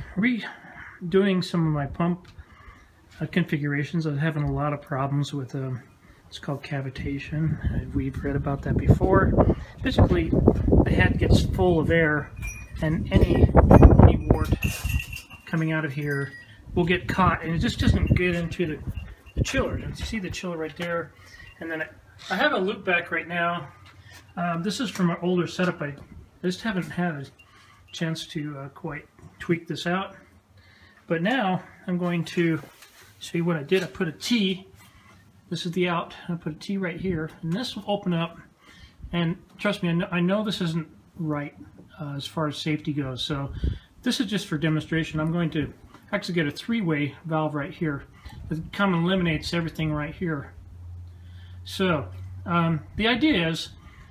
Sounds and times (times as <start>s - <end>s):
Speech: 0.0s - 2.3s, 3.2s - 14.8s, 15.5s - 23.7s, 24.4s - 30.2s, 31.1s - 34.7s, 35.5s - 38.4s, 39.1s - 50.6s, 51.7s - 53.8s.